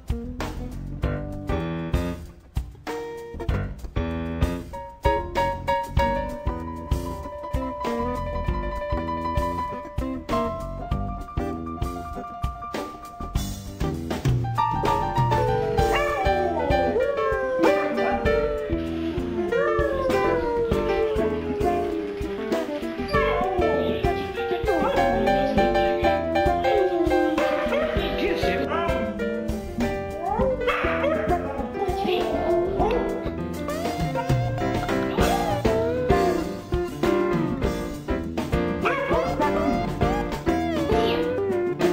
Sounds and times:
Music: 0:00.0 - 0:41.9
Speech: 0:23.1 - 0:29.2, 0:30.8 - 0:33.1, 0:38.8 - 0:40.2, 0:40.8 - 0:41.4.

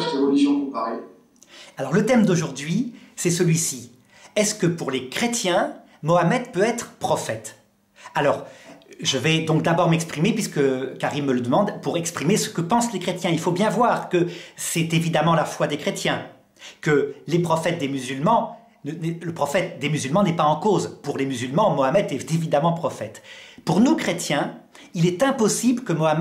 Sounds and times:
Speech: 0:00.0 - 0:01.2, 0:01.8 - 0:26.2.

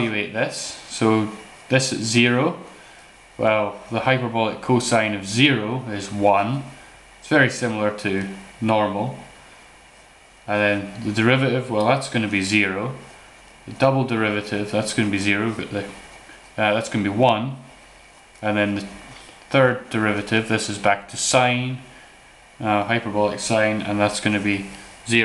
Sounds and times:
Speech: 0:00.0 - 0:02.8, 0:03.4 - 0:09.3, 0:10.5 - 0:13.1, 0:13.7 - 0:16.0, 0:16.6 - 0:17.7, 0:18.4 - 0:22.0, 0:22.6 - 0:25.2
Inside, small room: 0:00.0 - 0:25.2.

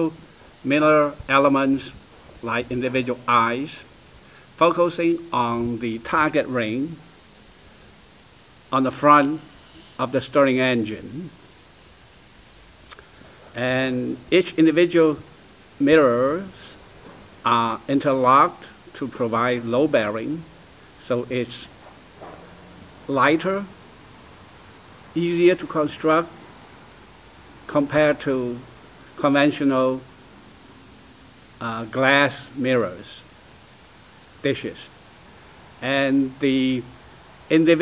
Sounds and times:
Speech: 0:00.0 - 0:03.9, 0:04.6 - 0:07.1, 0:08.7 - 0:11.4, 0:13.6 - 0:16.8, 0:17.4 - 0:21.8, 0:23.1 - 0:23.8, 0:25.1 - 0:26.4, 0:27.7 - 0:30.1, 0:31.6 - 0:33.3, 0:34.4 - 0:35.0, 0:35.8 - 0:36.9, 0:37.5 - 0:37.8.

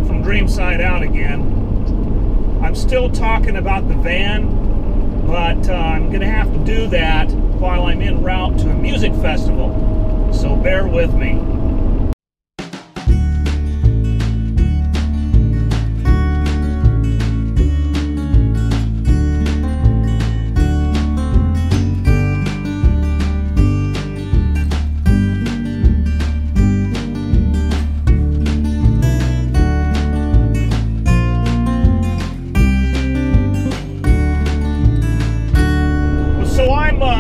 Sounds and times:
Blues: 0:12.6 - 0:37.2.

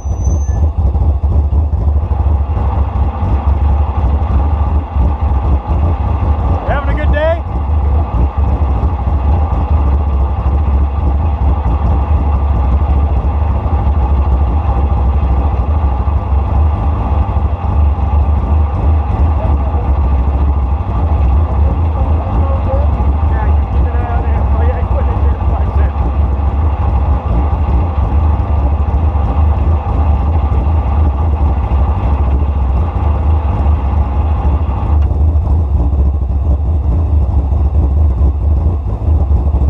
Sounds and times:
Car: 0:00.0 - 0:39.6.

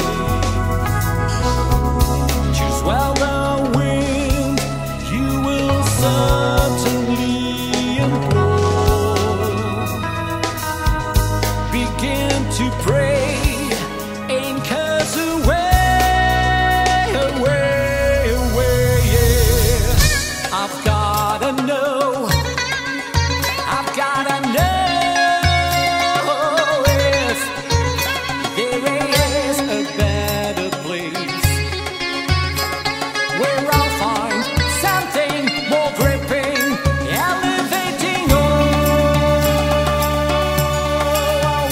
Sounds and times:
Folk music: 0:00.0 - 0:41.7.

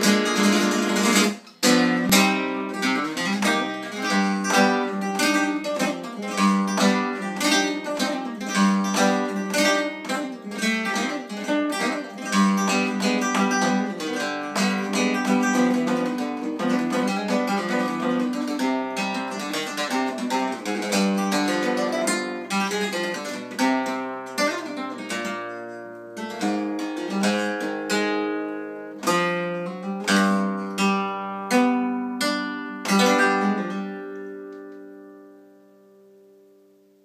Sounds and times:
Flamenco: 0:00.0 - 0:36.1
Strum: 0:00.0 - 0:37.0.

